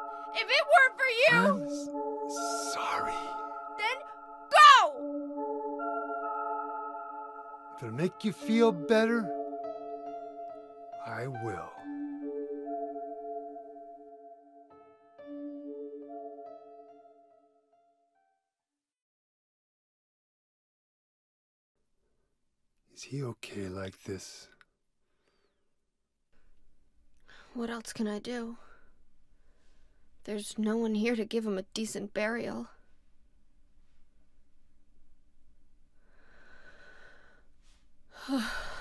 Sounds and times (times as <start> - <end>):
Music: 0.0 - 18.7.